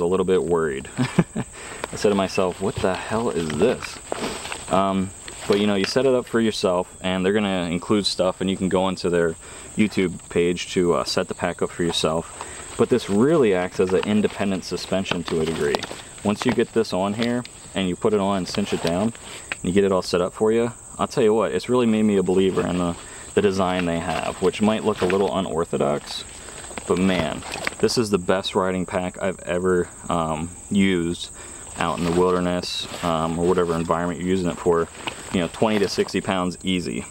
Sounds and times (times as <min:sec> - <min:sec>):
Speech: 0:00.0 - 0:01.1, 0:01.9 - 0:04.0, 0:04.7 - 0:37.1
Insect: 0:00.0 - 0:37.1
Outside, rural or natural: 0:00.0 - 0:37.1.